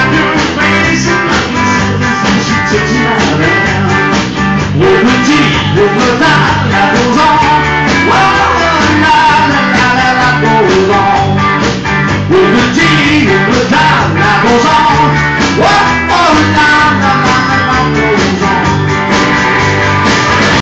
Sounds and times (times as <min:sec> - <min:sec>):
Music: 0:00.0 - 0:20.6.